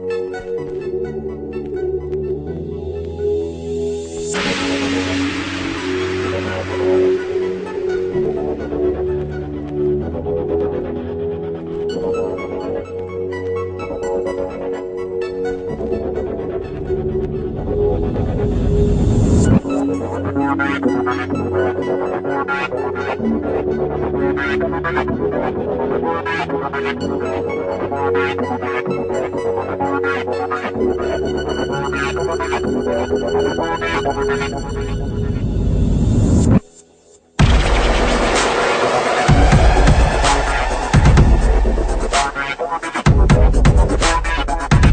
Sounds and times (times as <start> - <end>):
Theme music: 0.0 - 22.5, 30.4 - 36.6, 37.4 - 44.9.